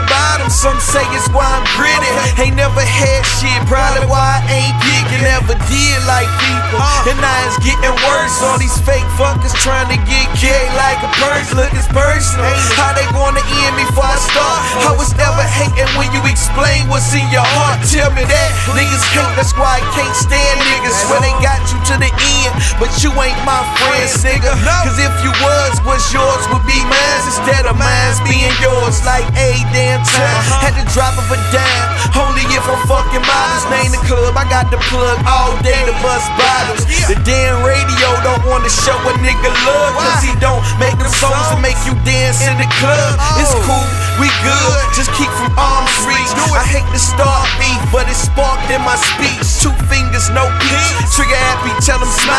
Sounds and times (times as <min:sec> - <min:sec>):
Music: 0:00.0 - 0:52.3.